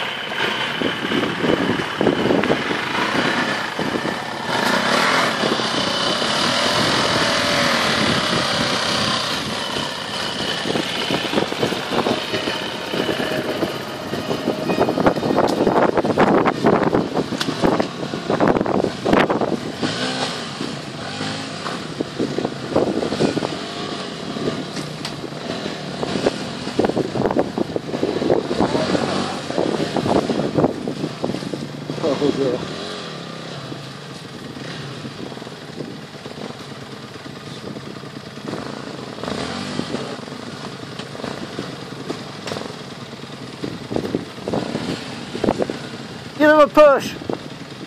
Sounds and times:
Speech: 32.0s - 32.7s, 46.4s - 47.2s.

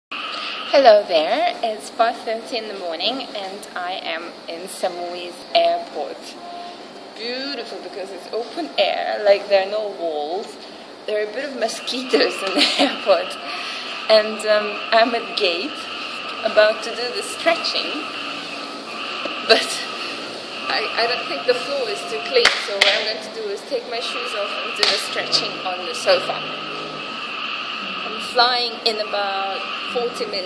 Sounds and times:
Speech: 0.7s - 6.4s, 7.2s - 18.1s, 19.5s - 19.9s, 20.7s - 26.6s, 27.8s - 30.4s.

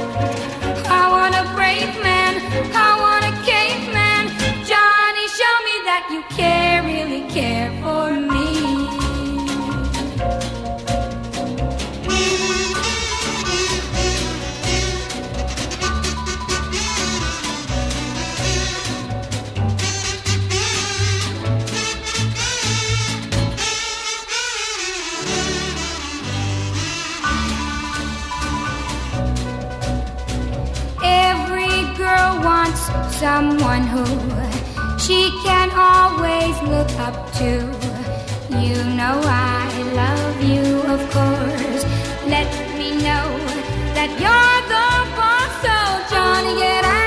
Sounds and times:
Music: 0.0s - 47.0s.

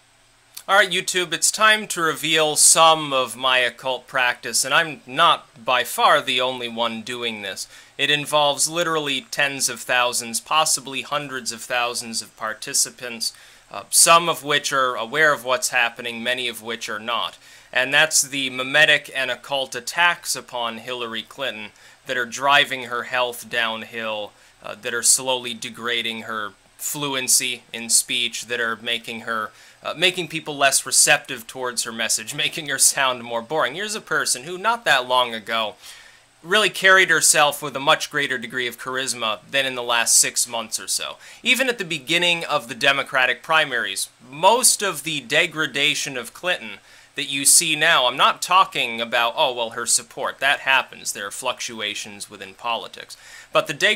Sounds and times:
Speech: 0.6s - 35.8s, 36.4s - 53.9s.

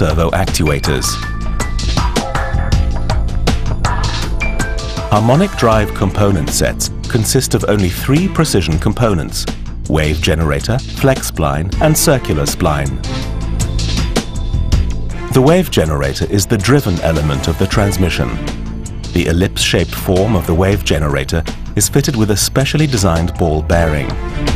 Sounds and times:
Speech: 0.0s - 1.2s, 5.1s - 13.0s, 15.3s - 18.4s, 19.1s - 24.2s
Music: 0.0s - 24.5s.

